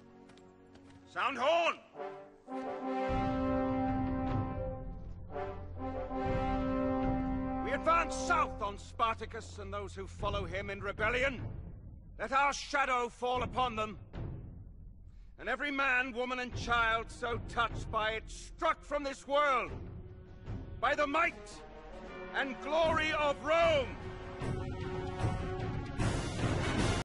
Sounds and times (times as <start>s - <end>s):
Music: 0.0s - 27.0s
Male speech, man speaking: 1.1s - 1.9s, 7.6s - 11.4s, 12.2s - 14.0s, 15.4s - 19.8s, 20.8s - 21.6s, 22.3s - 24.0s.